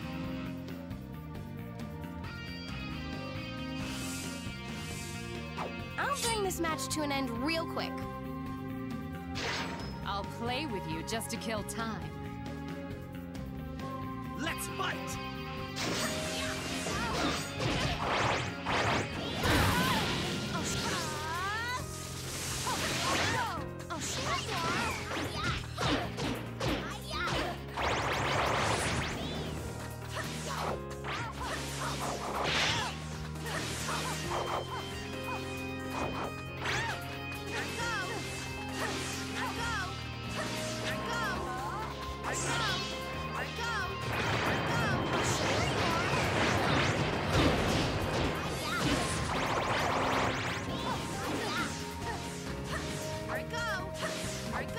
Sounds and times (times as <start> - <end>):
Music: 0.0 - 54.7
Speech: 6.0 - 8.0, 10.1 - 12.0.